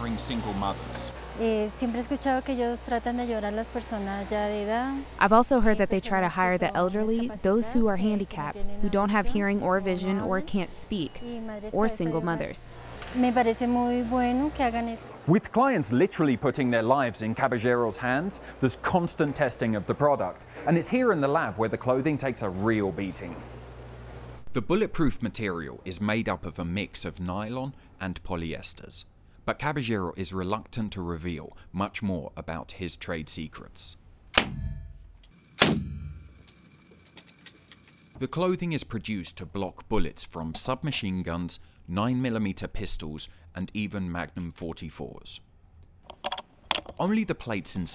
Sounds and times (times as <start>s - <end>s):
Speech: 0.0s - 23.4s, 24.6s - 34.0s, 38.2s - 45.4s, 47.0s - 47.9s.